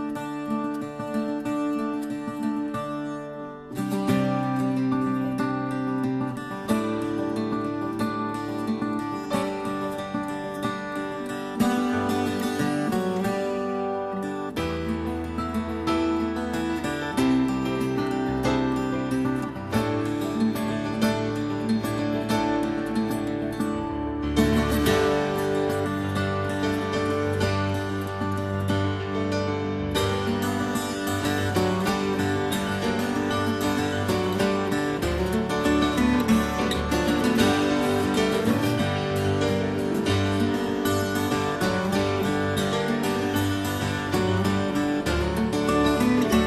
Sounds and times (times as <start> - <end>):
Music: 0.0 - 46.4.